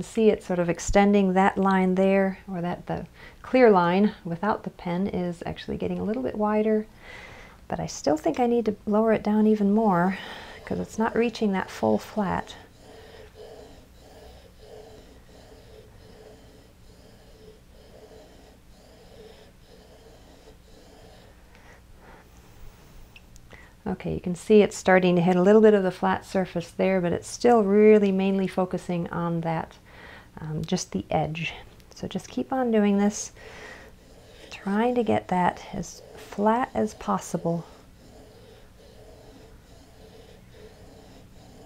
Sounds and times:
Speech: 7.7 - 12.6, 23.9 - 29.7, 30.4 - 33.3, 34.5 - 37.7.

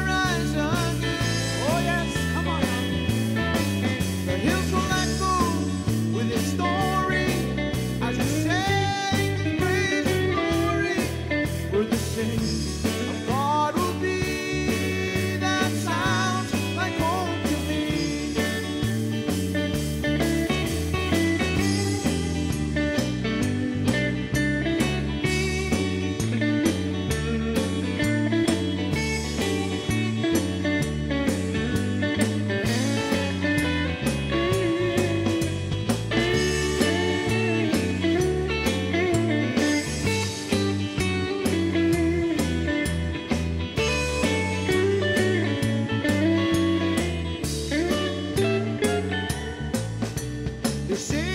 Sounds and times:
Blues: 0.0 - 51.3.

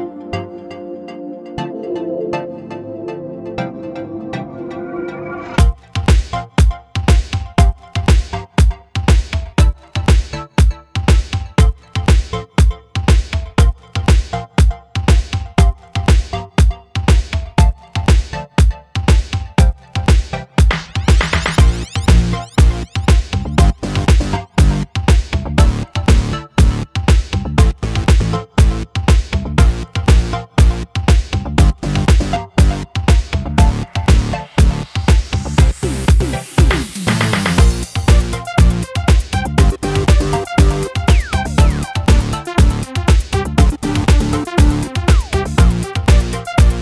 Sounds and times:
Music: 0.0 - 46.8.

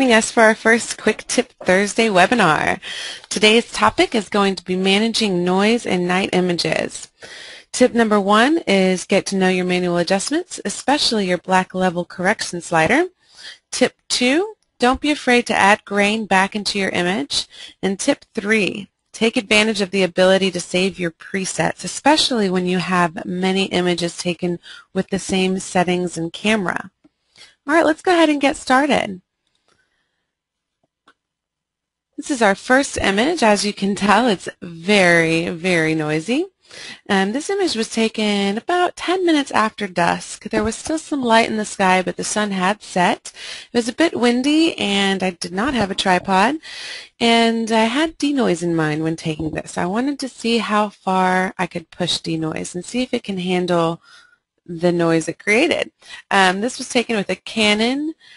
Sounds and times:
Speech: 0.0 - 29.2, 32.2 - 54.0, 54.7 - 58.2.

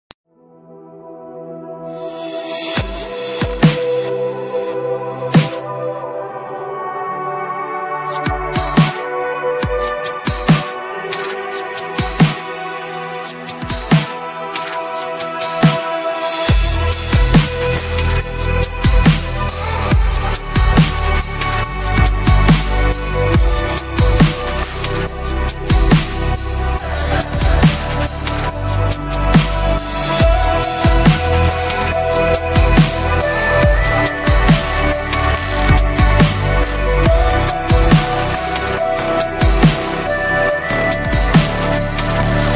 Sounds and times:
Ambient music: 0.3 - 42.5.

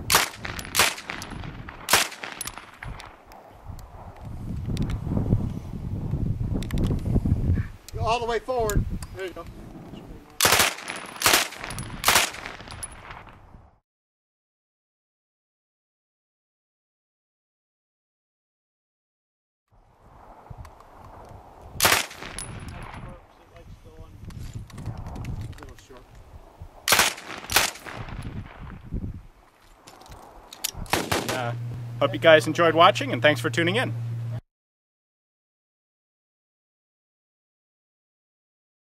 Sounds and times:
Machine gun: 1.9 - 2.7, 10.4 - 12.7, 26.9 - 28.0, 30.9 - 31.5.

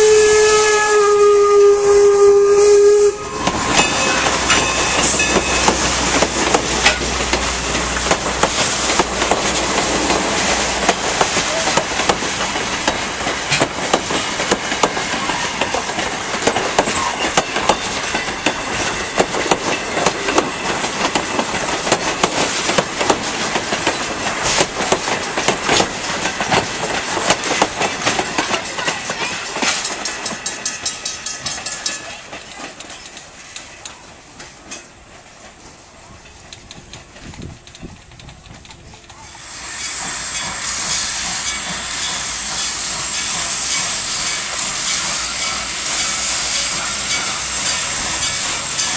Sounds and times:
Steam whistle: 0.0 - 5.3, 39.3 - 47.8
Hiss: 2.0 - 20.6, 21.3 - 28.2, 39.2 - 48.9.

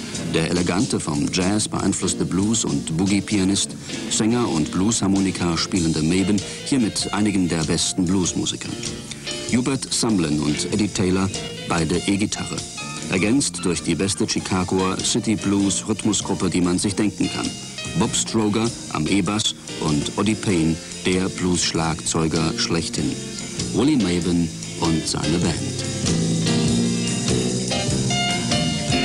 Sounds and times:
Music: 0.0 - 29.0
Speech: 0.3 - 8.9, 9.5 - 25.9.

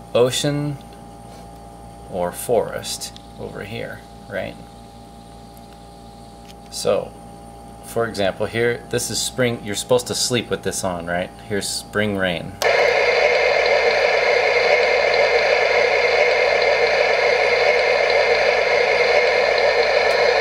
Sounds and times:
Speech: 0.1 - 0.9, 2.1 - 4.7, 6.7 - 7.2, 7.9 - 12.6.

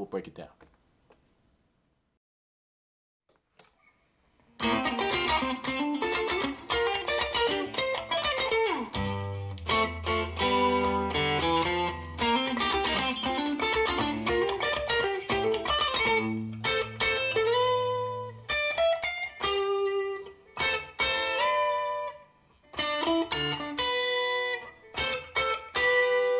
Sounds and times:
Electric guitar: 4.5 - 26.4.

